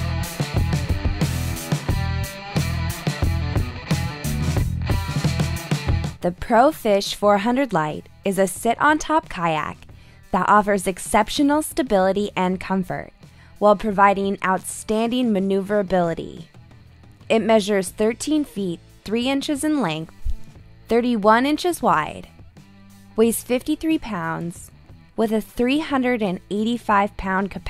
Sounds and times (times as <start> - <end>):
Music: 0.0 - 27.7
Speech: 6.2 - 16.5, 17.3 - 20.1, 20.9 - 22.3, 23.2 - 27.7.